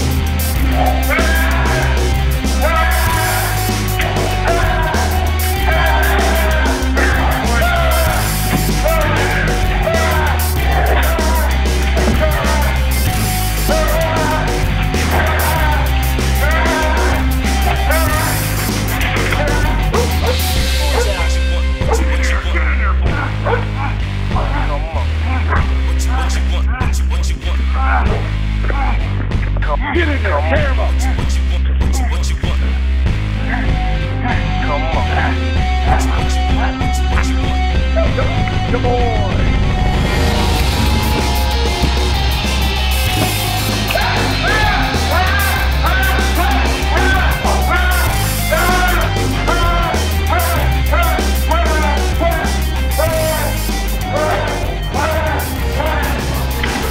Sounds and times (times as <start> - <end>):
Music: 0.0 - 56.9.